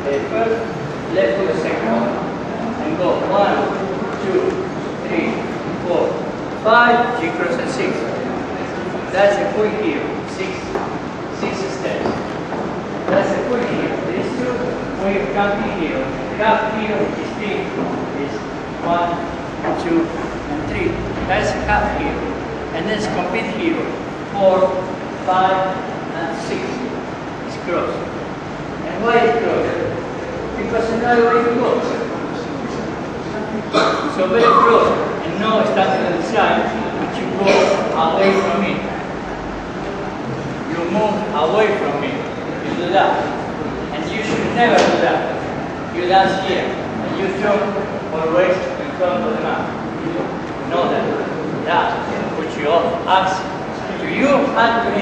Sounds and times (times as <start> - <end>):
Speech: 0.0 - 12.3, 13.0 - 28.1, 28.8 - 39.2, 40.6 - 55.0.